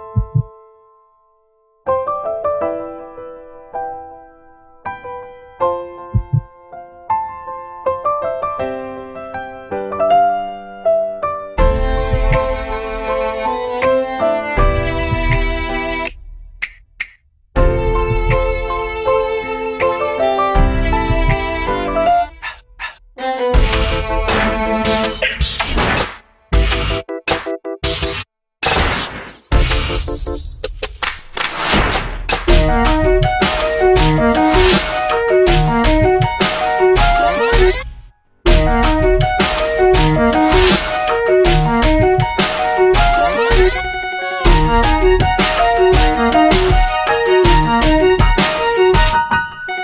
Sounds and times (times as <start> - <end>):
Background music: 0.0 - 16.8, 17.6 - 28.2, 31.7 - 49.8.